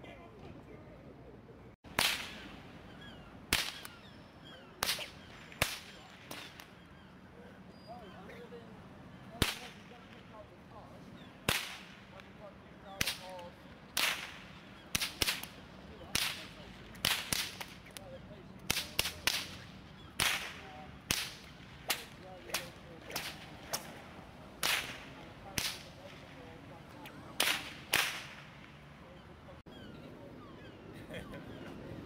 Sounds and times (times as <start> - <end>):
Whip: 1.9 - 2.5, 3.5 - 4.0, 4.8 - 6.8, 9.4 - 10.2, 11.5 - 12.2, 13.0 - 13.4, 14.0 - 18.0, 18.6 - 24.0, 24.6 - 26.2, 27.4 - 28.7.